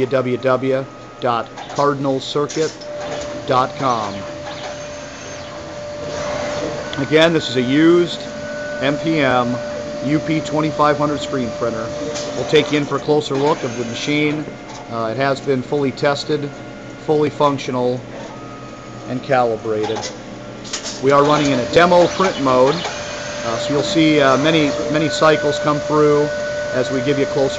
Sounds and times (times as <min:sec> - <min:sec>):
Speech: 0:00.0 - 0:02.8, 0:03.4 - 0:04.3, 0:07.0 - 0:18.1, 0:19.1 - 0:20.1, 0:21.0 - 0:22.8, 0:23.4 - 0:27.5
Printer: 0:00.0 - 0:27.5.